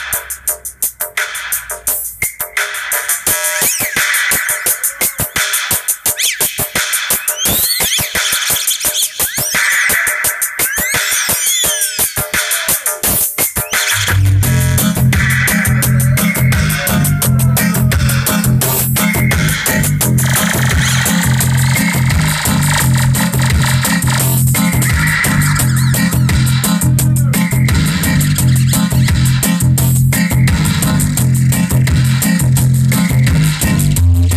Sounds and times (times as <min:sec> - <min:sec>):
Music: 0:00.0 - 0:34.3.